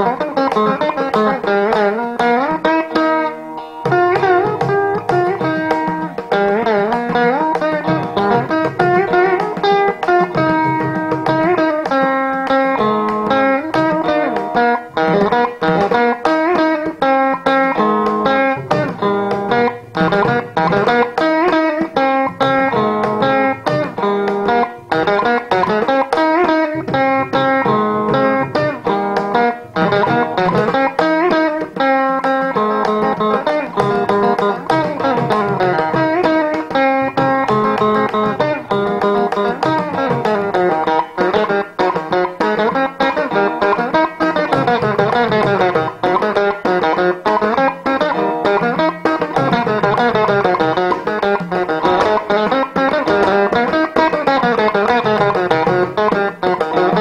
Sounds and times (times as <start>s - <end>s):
Carnatic music: 0.0s - 57.0s
Sitar: 0.0s - 57.0s.